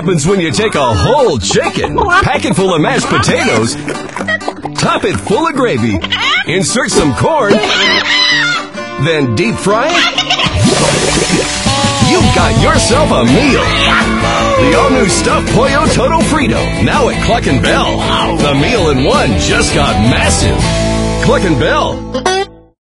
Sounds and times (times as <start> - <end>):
Music: 0.0 - 22.8
Speech: 9.0 - 10.0, 21.2 - 22.0.